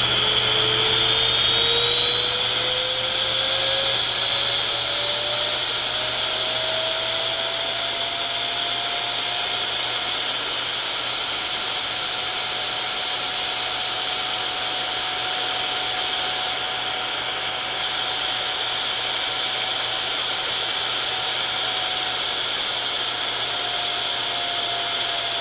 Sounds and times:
Dental drill, dentist's drill: 0.0 - 25.4
Inside, small room: 0.0 - 25.4.

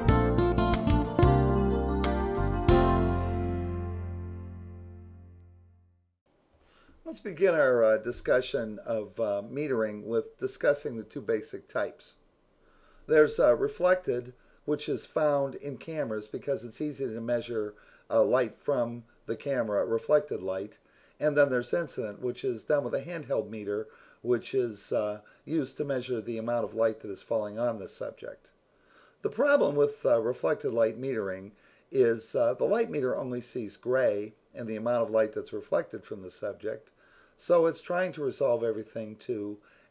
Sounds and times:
Speech: 7.1 - 12.2, 13.1 - 28.6, 29.2 - 39.6.

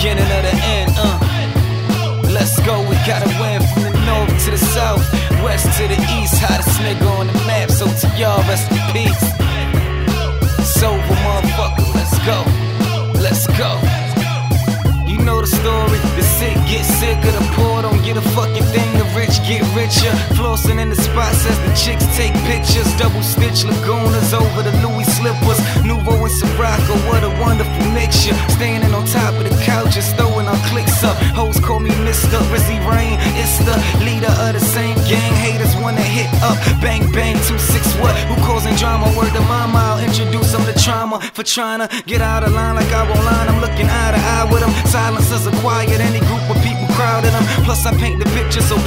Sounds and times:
Music: 0.0 - 48.8.

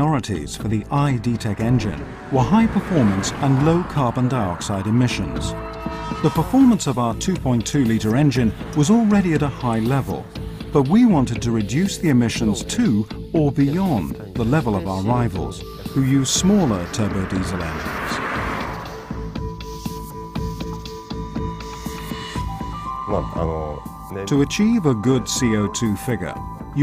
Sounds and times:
Speech: 0.0 - 5.6, 6.2 - 10.2, 10.8 - 18.2, 23.1 - 26.8
Car: 0.0 - 11.6, 13.9 - 22.6
Music: 0.0 - 26.8.

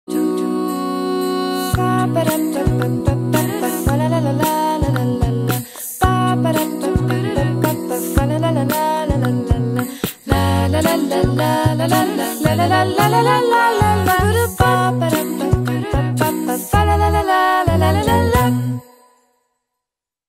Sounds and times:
Happy music: 0.1 - 19.2.

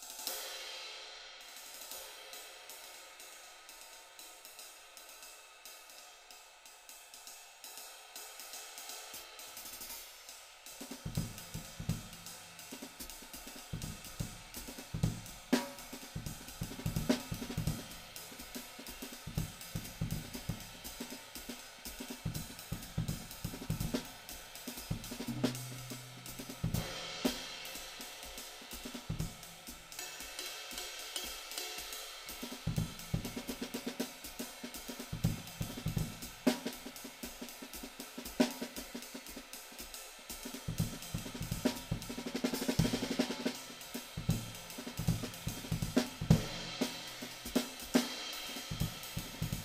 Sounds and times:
Hi-hat: 0.0 - 49.6
Drum kit: 1.4 - 49.6
Snare drum: 9.6 - 49.6.

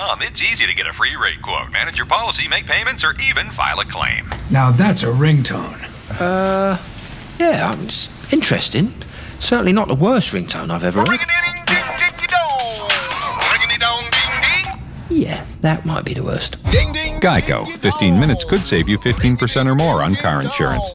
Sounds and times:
Speech: 7.4 - 12.4, 17.2 - 20.9
Music: 11.6 - 14.8, 16.7 - 20.9.

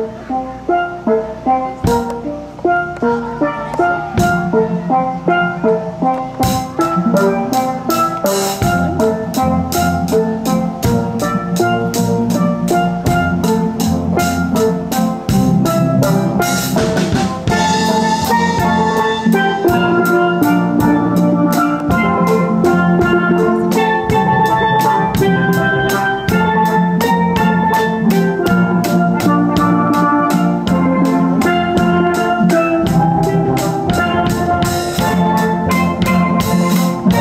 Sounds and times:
Bass drum: 6.4 - 37.2.

